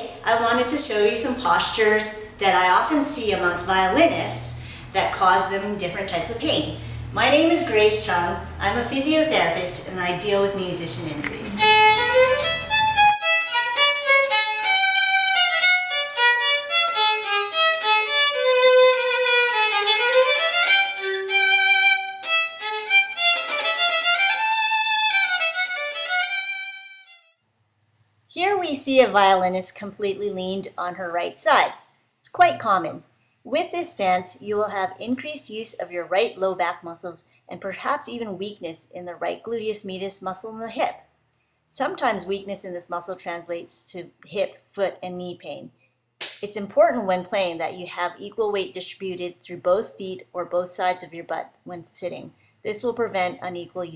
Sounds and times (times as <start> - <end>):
Speech: 0.0 - 11.6, 28.4 - 41.0, 41.7 - 45.7, 46.4 - 53.9
Violin, fiddle: 11.5 - 27.2.